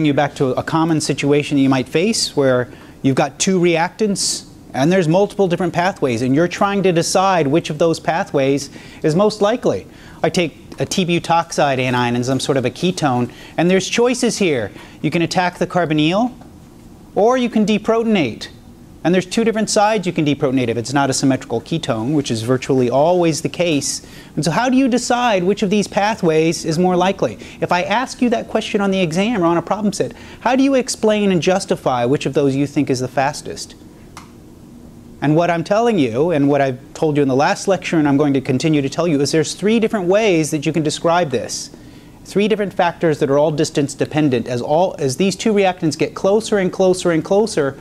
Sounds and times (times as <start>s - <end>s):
Speech: 0.0s - 16.4s, 17.2s - 33.8s, 35.2s - 47.8s.